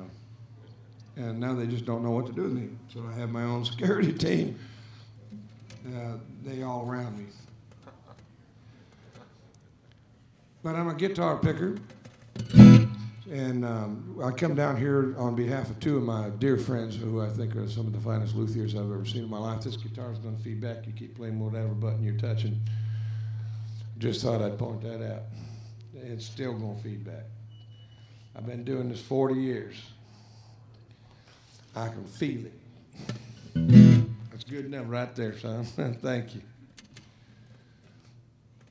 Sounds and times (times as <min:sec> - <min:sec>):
Speech: 0:01.2 - 0:04.6, 0:05.8 - 0:07.5, 0:10.6 - 0:11.8, 0:13.3 - 0:22.6, 0:24.0 - 0:25.3, 0:25.9 - 0:27.3, 0:28.3 - 0:30.0, 0:31.7 - 0:32.6, 0:34.3 - 0:36.5.